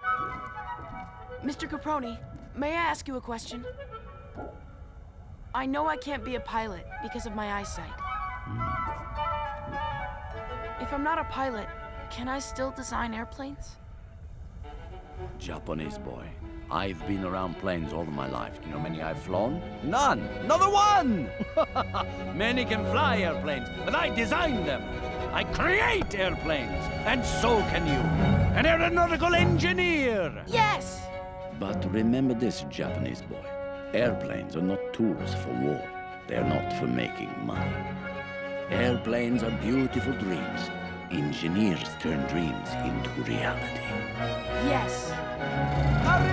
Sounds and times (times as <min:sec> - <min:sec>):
Music: 0:00.0 - 0:46.3
Speech: 0:15.4 - 0:21.2, 0:34.0 - 0:37.8, 0:38.7 - 0:44.0.